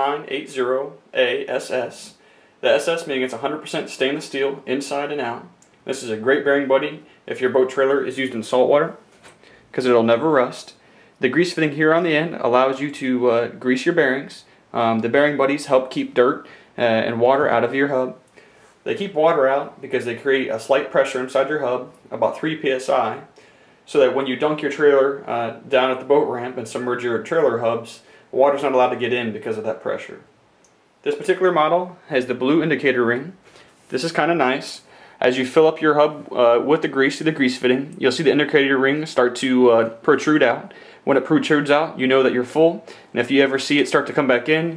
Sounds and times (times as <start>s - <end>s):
Speech: 0.0s - 9.1s, 9.7s - 30.4s, 31.0s - 44.7s.